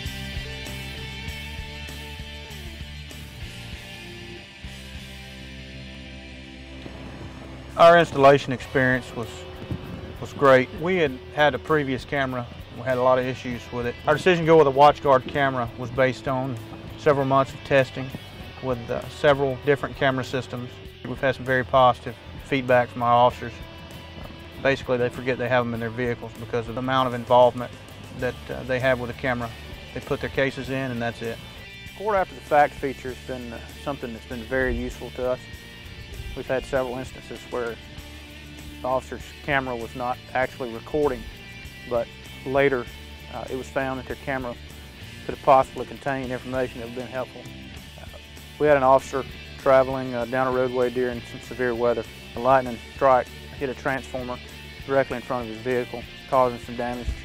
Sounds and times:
Music: 0:00.0 - 0:57.2
Speech: 0:07.8 - 0:09.4, 0:10.2 - 0:23.6, 0:24.6 - 0:31.4, 0:32.0 - 0:35.4, 0:36.4 - 0:37.8, 0:38.8 - 0:41.2, 0:41.9 - 0:44.6, 0:45.3 - 0:47.4, 0:48.6 - 0:57.2.

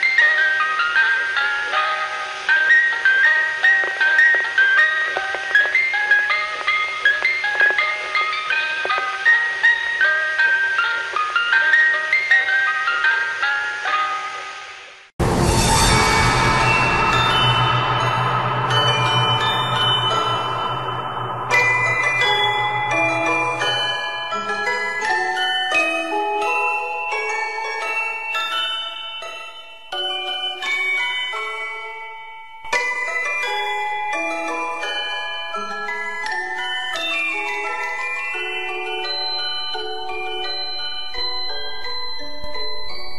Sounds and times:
Music: 0:00.0 - 0:43.1.

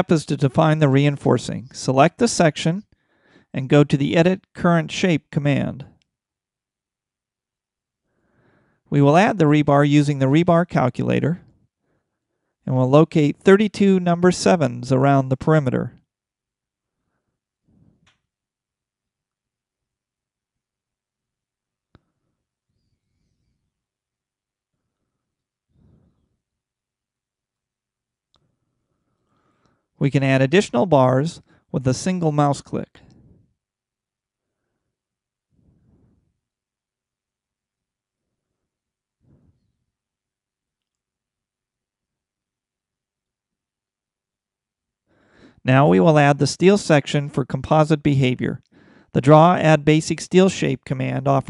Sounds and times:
Silence: 0:16.0 - 0:30.0, 0:32.8 - 0:45.6.

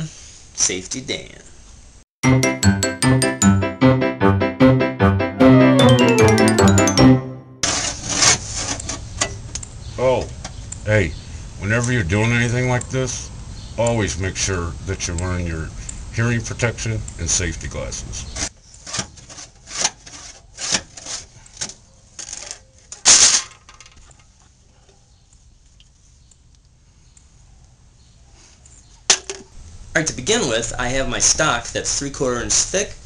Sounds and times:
Speech: 0:00.0 - 0:01.6, 0:10.0 - 0:18.3, 0:30.0 - 0:33.0
Music: 0:02.2 - 0:07.6.

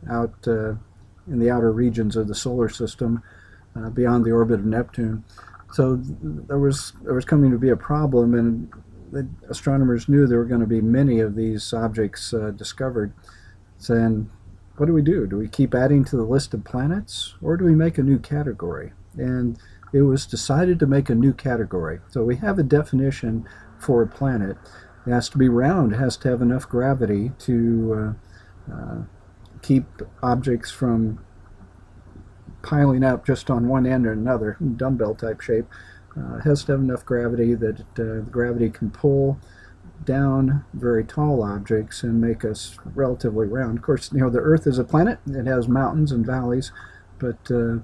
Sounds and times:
Speech: 0:00.0 - 0:31.3, 0:32.4 - 0:47.8.

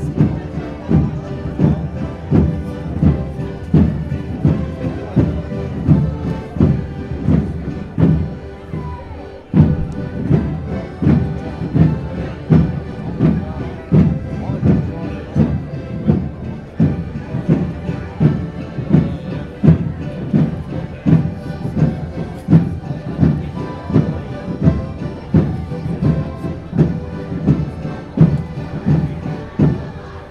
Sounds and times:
Speech: 0:00.0 - 0:30.3.

